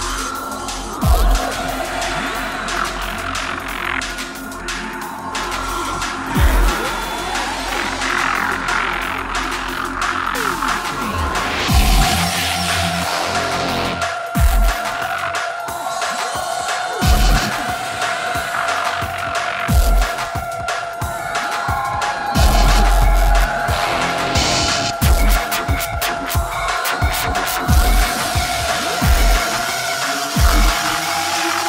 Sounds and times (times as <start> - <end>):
Dubstep: 0.0 - 31.6.